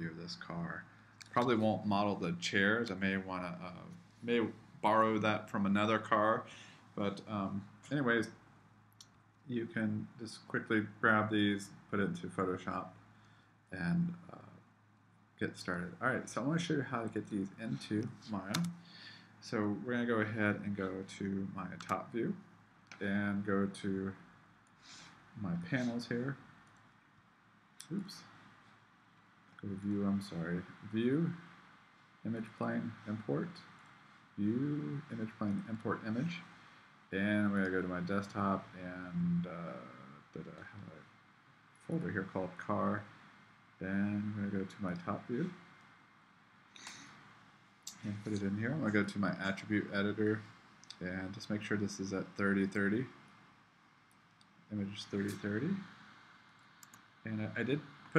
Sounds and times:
Speech: 0.0 - 8.3, 9.5 - 12.9, 13.8 - 14.6, 15.4 - 18.7, 19.4 - 22.4, 23.0 - 24.2, 25.4 - 26.4, 27.8 - 28.3, 29.6 - 31.4, 32.3 - 33.7, 34.4 - 36.5, 37.2 - 41.1, 41.9 - 43.1, 43.8 - 45.6, 47.9 - 53.1, 54.7 - 55.9, 57.3 - 58.1.

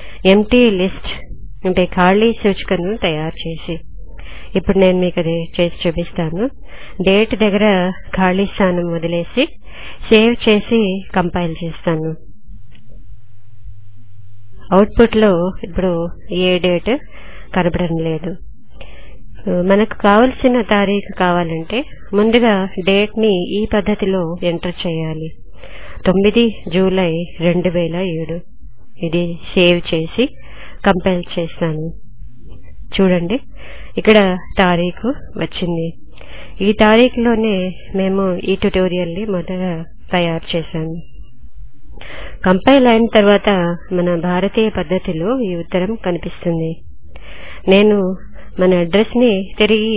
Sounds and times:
Speech: 0.2 - 3.9, 4.5 - 12.2, 14.6 - 18.4, 19.4 - 25.4, 26.0 - 32.0, 32.9 - 36.0, 36.6 - 41.0, 42.4 - 46.8, 47.7 - 49.9.

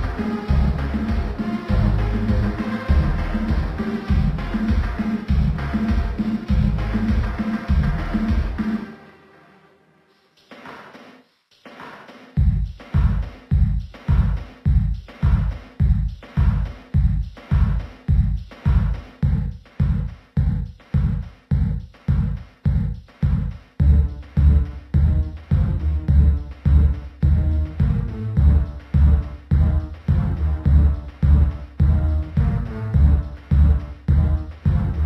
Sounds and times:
Music: 0.0 - 35.0.

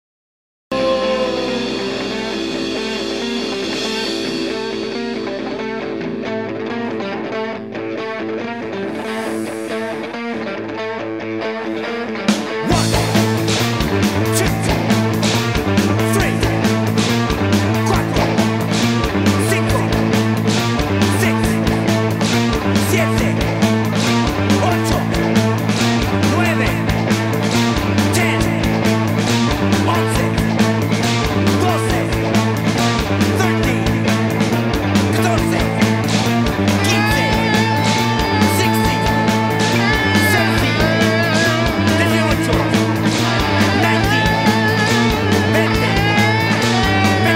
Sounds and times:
Music: 0.7 - 47.3.

